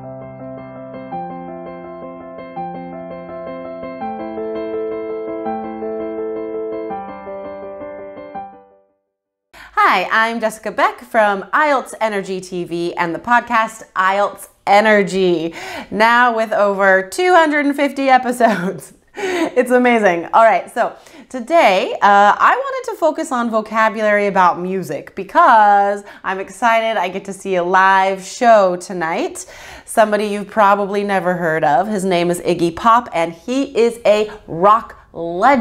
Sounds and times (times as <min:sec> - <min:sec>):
Speech: 0:09.7 - 0:18.9, 0:19.5 - 0:35.6.